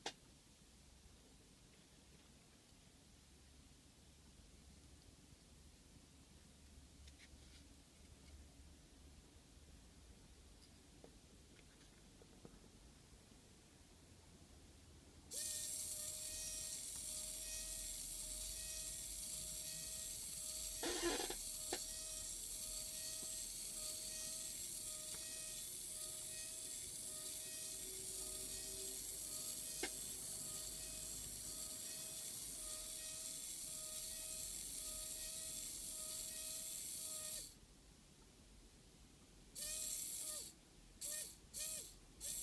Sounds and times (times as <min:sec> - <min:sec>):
Inside, small room: 0:00.0 - 0:42.4.